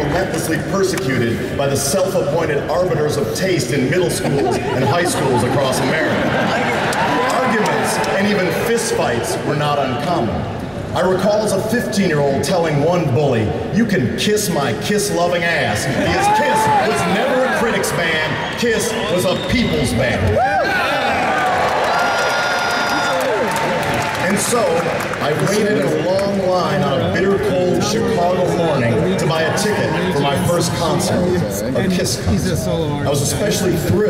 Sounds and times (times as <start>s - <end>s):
Male speech, man speaking: 0.0s - 21.1s, 24.2s - 34.1s.